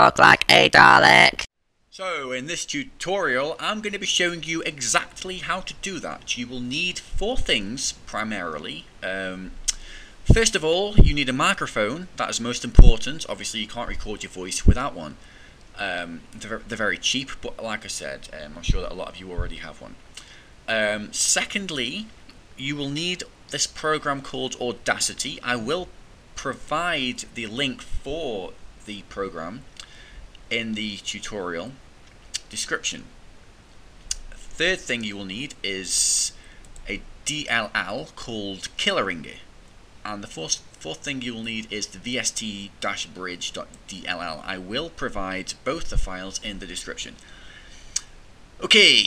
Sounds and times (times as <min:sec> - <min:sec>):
Speech: 0:00.0 - 0:15.2, 0:15.8 - 0:29.8, 0:30.5 - 0:31.8, 0:32.4 - 0:33.1, 0:34.1 - 0:39.5, 0:40.1 - 0:47.3, 0:48.6 - 0:49.0.